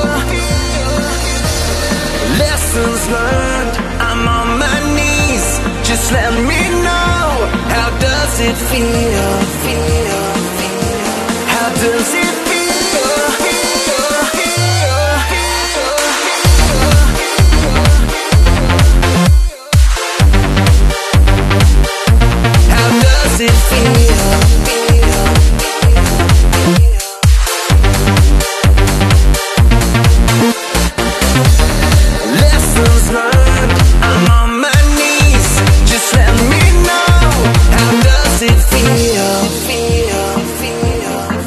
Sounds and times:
Music: 0.0s - 41.4s.

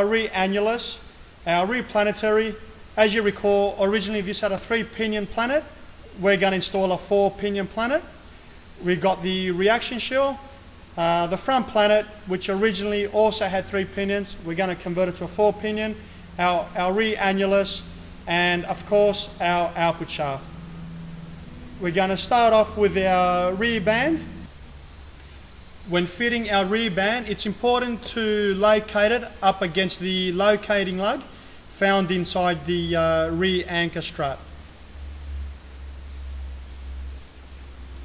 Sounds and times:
Speech: 0.0s - 8.2s, 8.8s - 20.5s, 21.8s - 24.5s, 25.9s - 34.5s.

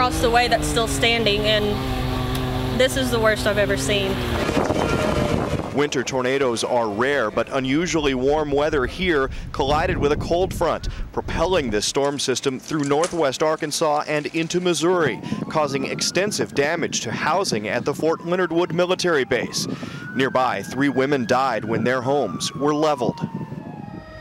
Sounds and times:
Speech: 0.0s - 1.8s, 2.8s - 4.6s, 5.8s - 23.2s.

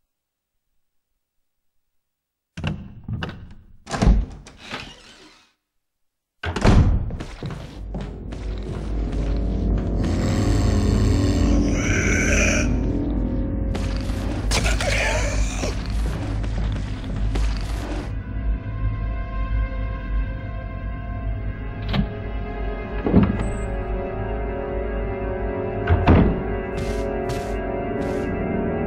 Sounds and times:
Music: 7.4s - 28.8s.

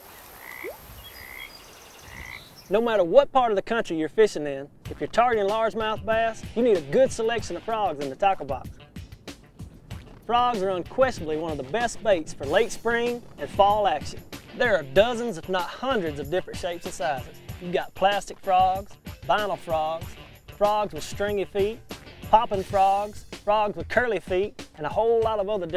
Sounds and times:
Speech: 2.7s - 8.7s, 10.3s - 20.0s, 20.6s - 25.7s
Music: 4.2s - 25.7s.

